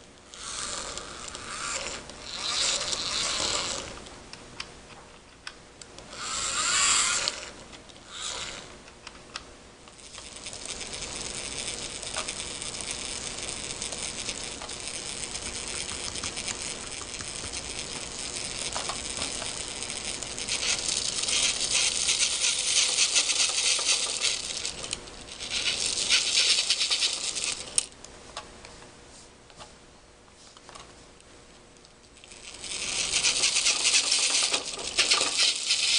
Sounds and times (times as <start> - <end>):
Inside, small room: 0.0 - 35.9.